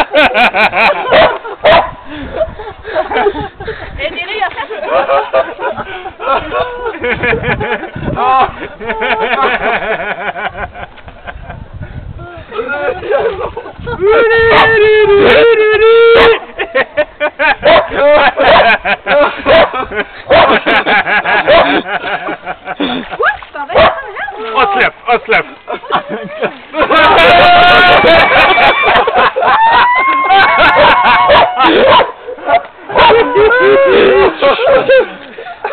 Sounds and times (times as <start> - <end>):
Stream: 0.0 - 35.7.